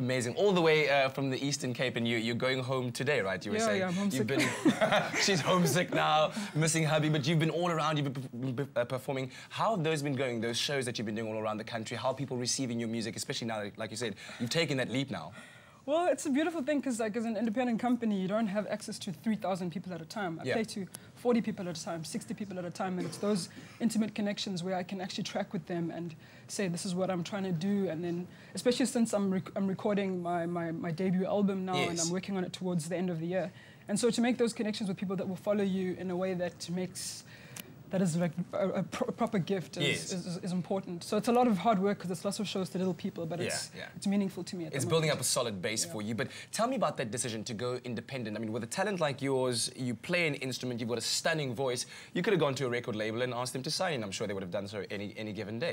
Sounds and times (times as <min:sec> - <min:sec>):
Speech: 0:31.7 - 0:32.8, 0:39.1 - 0:55.7.